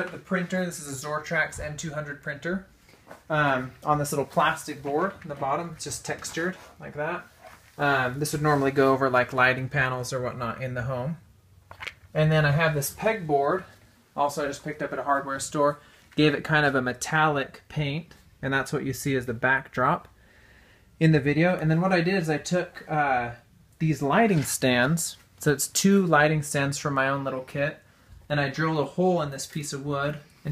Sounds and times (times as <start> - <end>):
Speech: 0.0 - 2.7, 3.3 - 11.2, 12.1 - 20.1, 21.0 - 30.5.